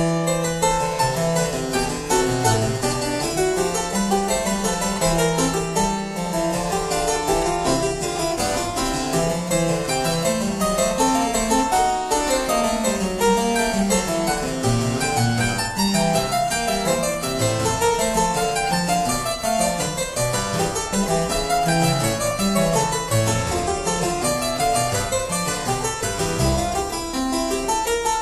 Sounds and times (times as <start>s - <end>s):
Harpsichord: 0.0s - 28.2s
Piano: 0.0s - 28.2s.